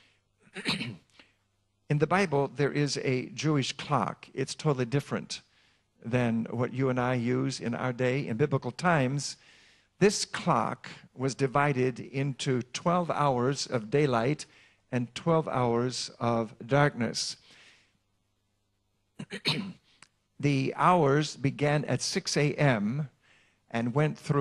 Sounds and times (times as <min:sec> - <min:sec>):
Speech: 0:01.9 - 0:09.4, 0:10.0 - 0:17.4, 0:20.4 - 0:24.4.